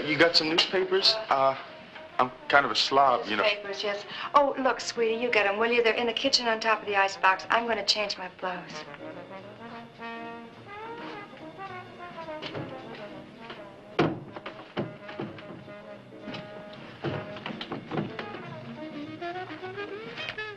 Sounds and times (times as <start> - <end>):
Music: 0.0 - 20.5.